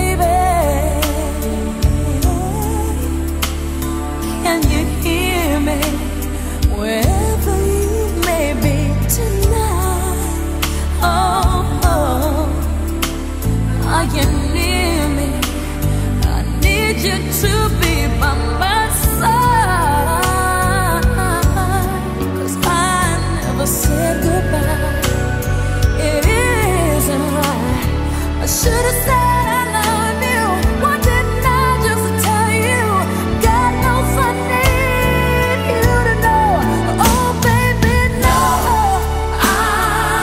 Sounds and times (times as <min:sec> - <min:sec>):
Pop music: 0:00.0 - 0:40.2.